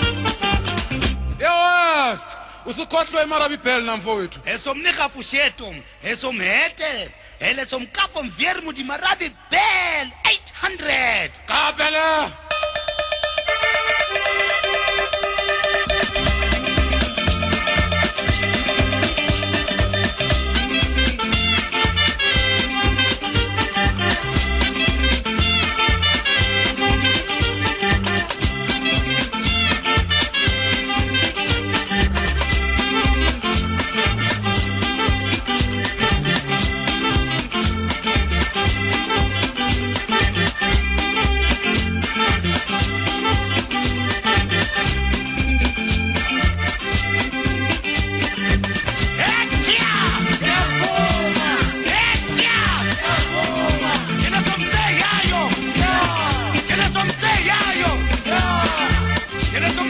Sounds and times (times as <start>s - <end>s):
Music: 0.0s - 1.6s, 12.4s - 59.8s.